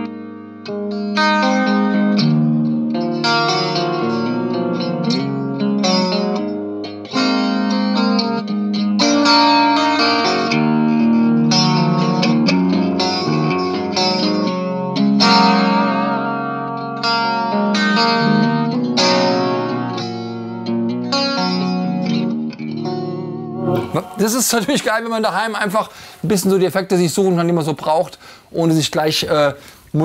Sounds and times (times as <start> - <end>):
Effects unit: 0.0 - 24.8
Electric guitar: 0.0 - 24.8.